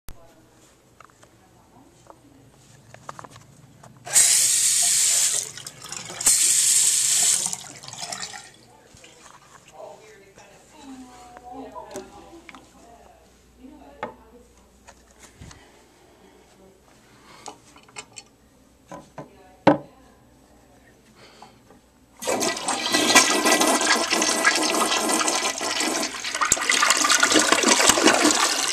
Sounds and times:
Sink (filling or washing): 4.1s - 8.6s, 22.2s - 28.7s
Water tap, faucet: 4.1s - 8.6s, 22.2s - 28.7s
Water: 5.4s - 6.3s, 7.4s - 9.4s, 22.2s - 28.7s.

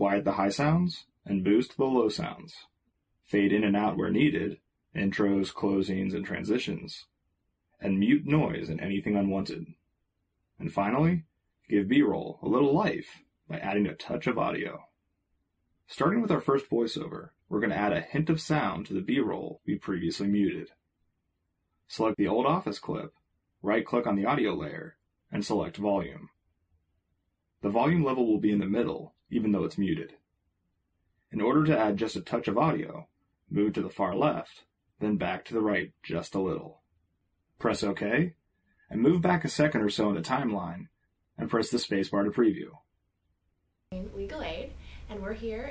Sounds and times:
Speech: 0.0s - 2.7s, 3.3s - 7.1s, 7.8s - 9.7s, 10.6s - 14.8s, 15.9s - 20.7s, 21.9s - 26.3s, 27.6s - 30.2s, 31.3s - 36.8s, 37.6s - 42.8s, 43.9s - 45.7s.

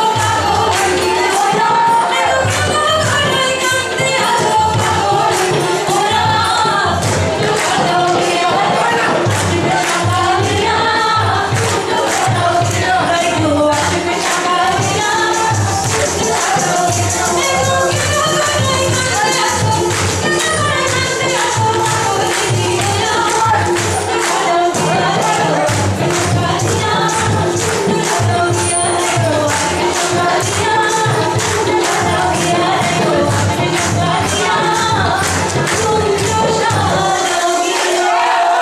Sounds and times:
Singing: 0.0s - 38.6s.

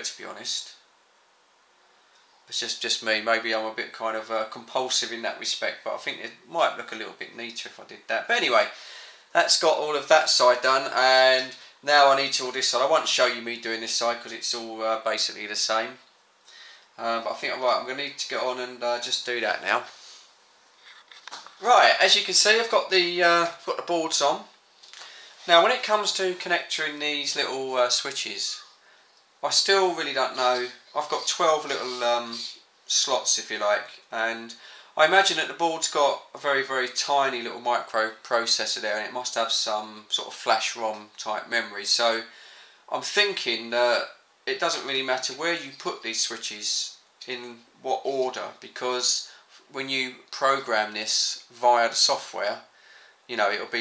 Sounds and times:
Speech: 0.0s - 0.8s, 2.5s - 16.1s, 17.0s - 20.0s, 21.6s - 24.6s, 25.4s - 28.8s, 29.4s - 52.7s, 53.3s - 53.8s
Inside, small room: 0.0s - 53.8s.

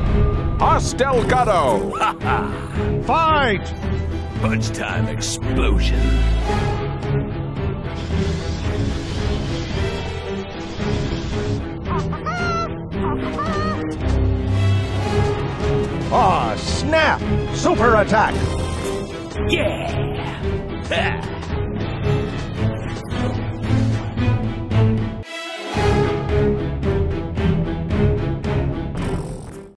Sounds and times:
Music: 0.0s - 29.7s.

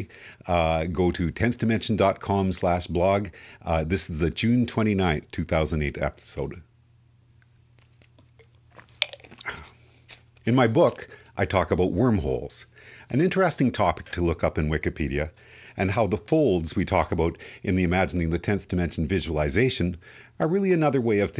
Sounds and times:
Speech: 0.0s - 6.7s, 10.4s - 21.4s.

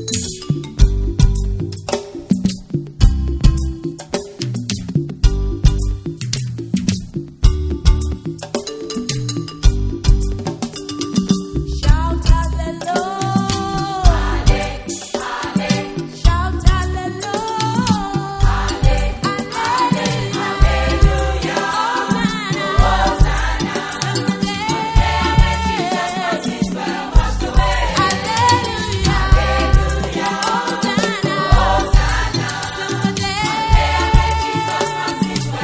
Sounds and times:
Music: 0.0s - 35.6s.

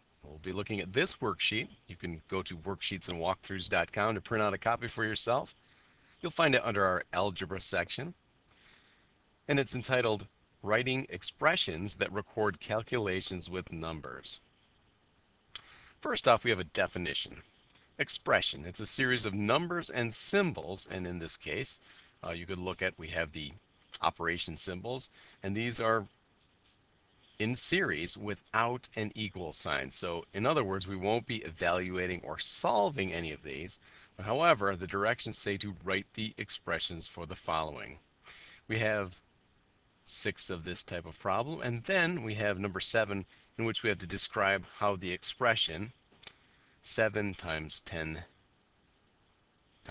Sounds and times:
Speech: 0.3s - 5.6s, 6.2s - 8.2s, 9.5s - 14.4s, 16.0s - 17.4s, 18.0s - 26.1s, 27.4s - 38.0s, 38.7s - 39.2s, 40.1s - 46.0s, 46.8s - 48.3s.

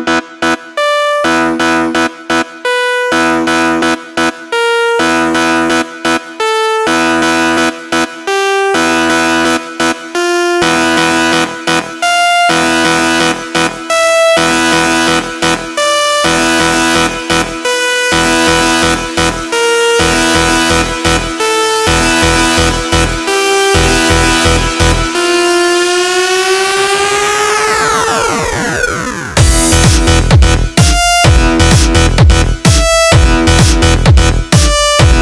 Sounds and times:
Music: 0.0s - 35.2s.

